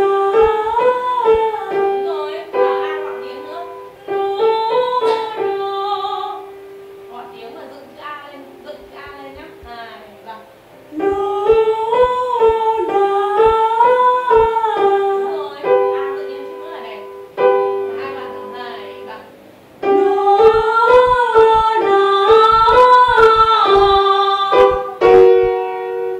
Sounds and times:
Piano: 0.0 - 26.1.

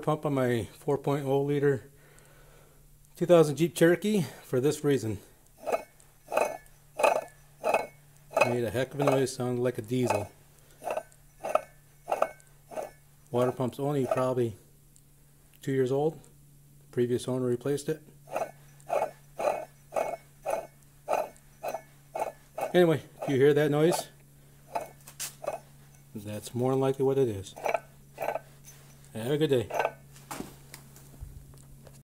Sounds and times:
Speech: 0.0 - 1.9, 3.2 - 5.3, 8.4 - 10.3, 13.3 - 14.6, 15.6 - 16.3, 16.9 - 18.1, 22.7 - 24.2, 26.2 - 27.6, 29.2 - 29.8.

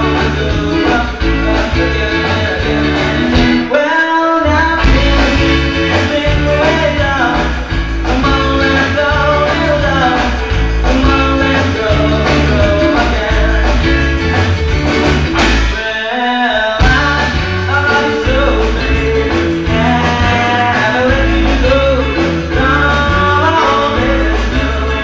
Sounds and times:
Rock and roll: 0.0 - 25.0.

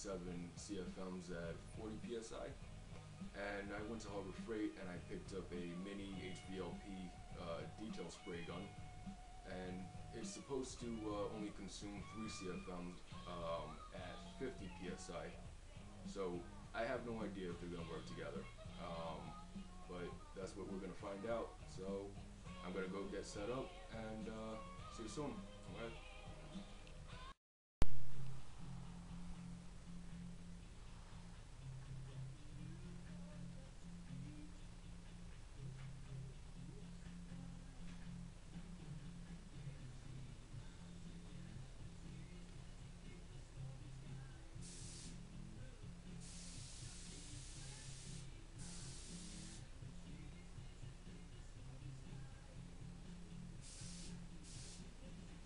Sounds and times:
Speech: 0.0 - 2.6, 3.4 - 8.8, 9.5 - 15.4, 16.1 - 26.0.

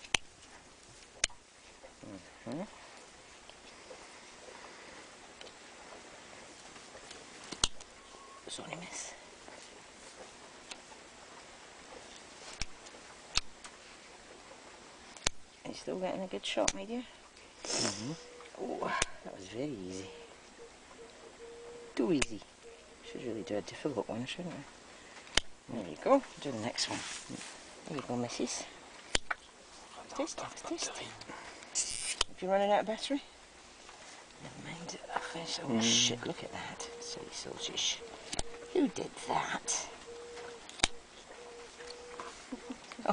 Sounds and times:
Speech: 15.7 - 17.1, 23.1 - 24.7, 25.7 - 28.8, 30.0 - 31.2, 32.4 - 33.3, 34.4 - 38.0, 38.7 - 40.0.

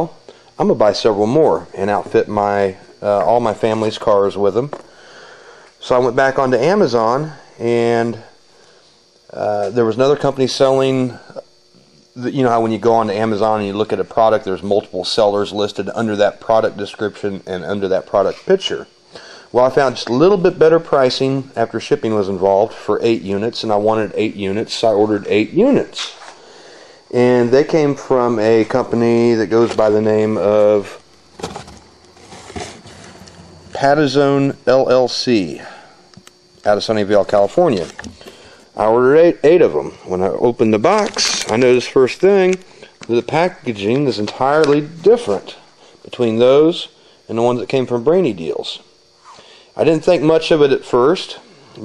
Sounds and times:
Speech: 0.0 - 4.8, 5.8 - 8.3, 9.3 - 11.5, 12.2 - 18.9, 19.5 - 26.2, 27.1 - 31.0, 33.7 - 35.8, 36.6 - 38.0, 38.8 - 48.9, 49.8 - 51.8
Inside, small room: 0.0 - 51.8.

